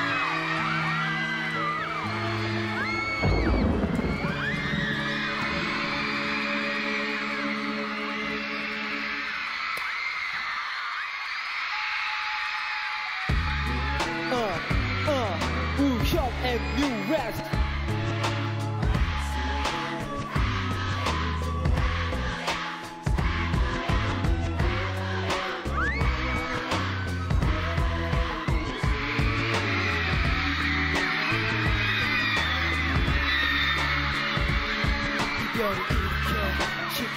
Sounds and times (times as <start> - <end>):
Music: 0.0 - 37.1.